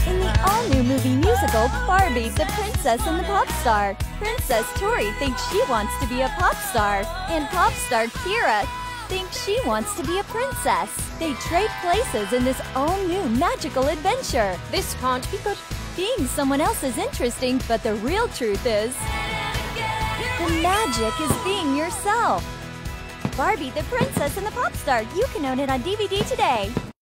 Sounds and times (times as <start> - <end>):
Speech: 0.0 - 19.0, 20.3 - 22.4, 23.4 - 26.8
Music: 0.0 - 27.0.